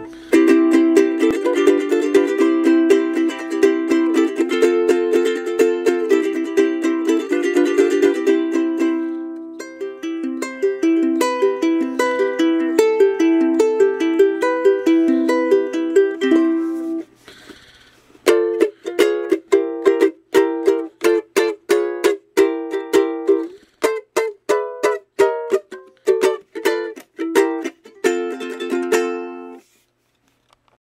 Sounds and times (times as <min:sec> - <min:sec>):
Music: 0:00.0 - 0:17.1, 0:18.2 - 0:29.6.